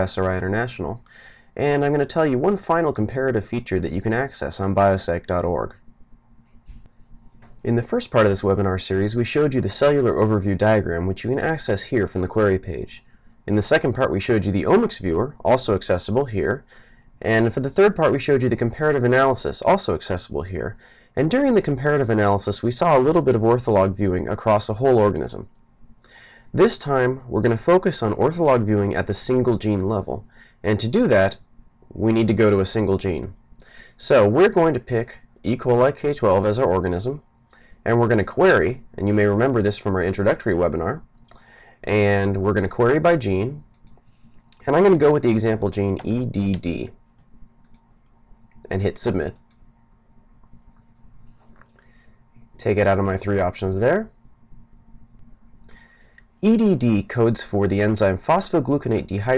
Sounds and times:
Speech: 0.0s - 5.8s, 7.6s - 25.6s, 26.5s - 41.1s, 41.8s - 43.8s, 44.6s - 47.0s, 48.7s - 49.4s, 52.6s - 54.2s, 56.4s - 59.3s.

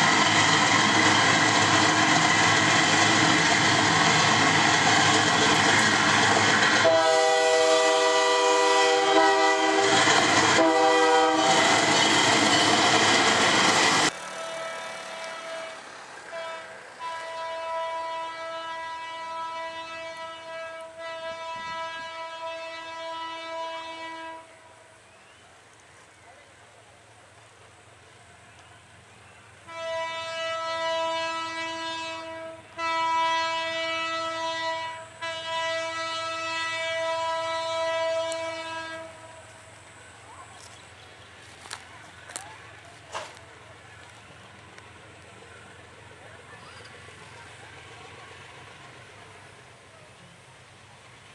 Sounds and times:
Outside, urban or manmade: 0.0s - 51.3s
Railroad car, train wagon: 0.0s - 51.3s
Train: 0.0s - 51.3s.

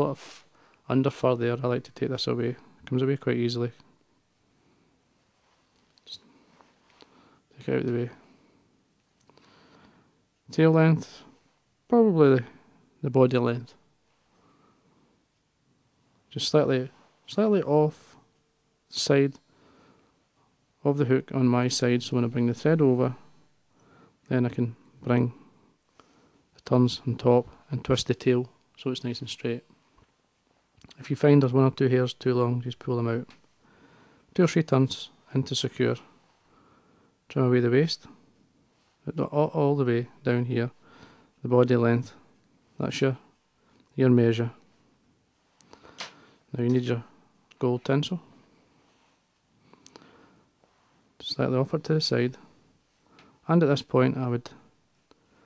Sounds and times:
Speech: 0.0s - 3.9s, 6.0s - 6.2s, 7.5s - 8.2s, 10.5s - 13.8s, 16.3s - 18.2s, 18.9s - 19.4s, 20.8s - 23.3s, 24.3s - 25.4s, 26.6s - 29.7s, 30.8s - 33.4s, 34.3s - 36.1s, 37.3s - 38.2s, 39.0s - 40.8s, 41.4s - 42.2s, 42.8s - 43.3s, 43.9s - 44.6s, 46.5s - 48.3s, 51.2s - 52.5s, 53.4s - 54.6s.

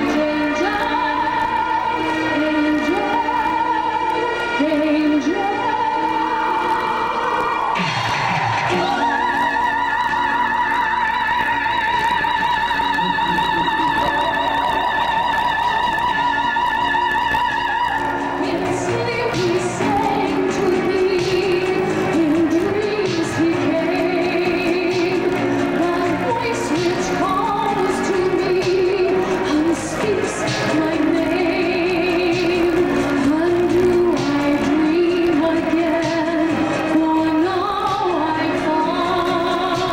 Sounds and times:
Female singing: 0.0s - 7.4s, 8.7s - 39.9s
Opera: 0.0s - 39.9s.

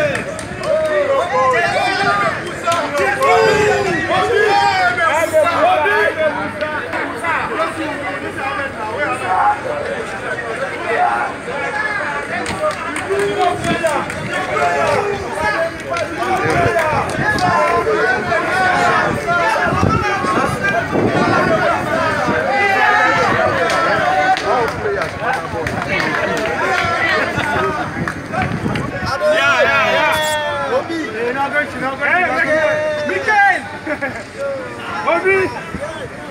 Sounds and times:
Speech: 0.0s - 36.3s.

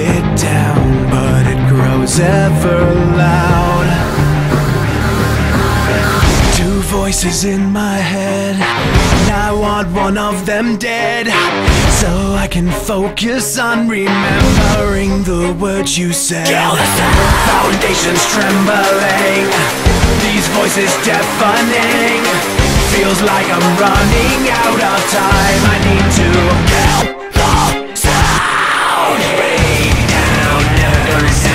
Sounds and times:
Music: 0.0s - 31.5s.

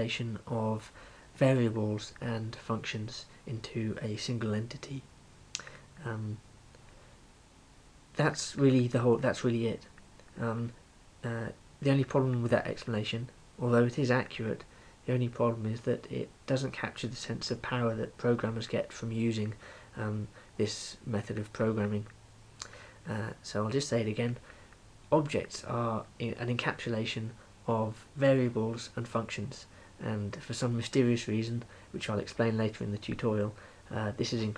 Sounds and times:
Speech: 0.0s - 5.1s, 6.0s - 6.4s, 8.2s - 22.2s, 23.0s - 24.4s, 25.1s - 34.5s.

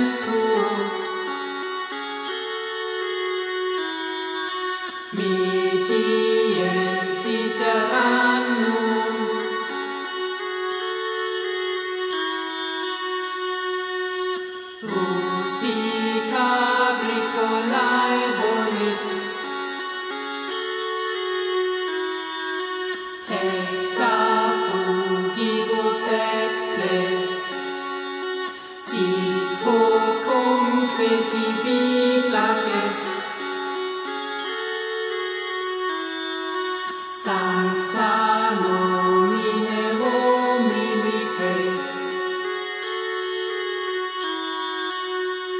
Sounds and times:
Carnatic music: 0.0s - 45.5s.

